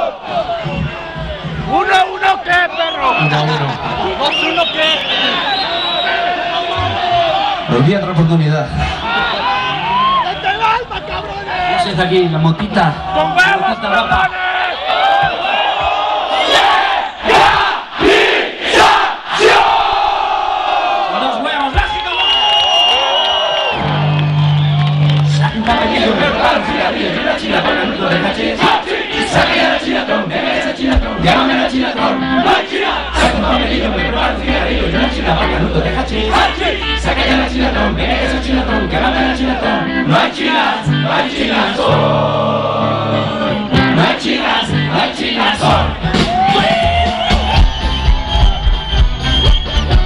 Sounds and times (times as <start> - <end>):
Crowd: 0.0 - 50.0
Battle cry: 14.4 - 21.4, 25.5 - 46.7.